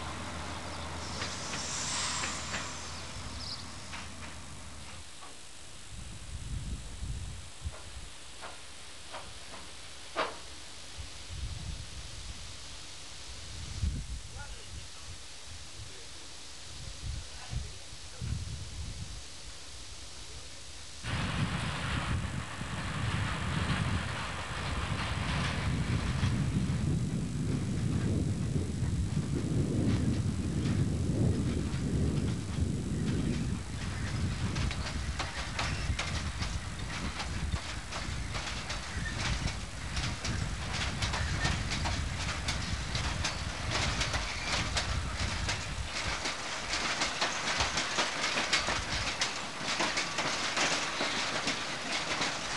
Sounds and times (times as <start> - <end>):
Railroad car, train wagon: 0.0 - 52.5
Train: 0.0 - 52.5.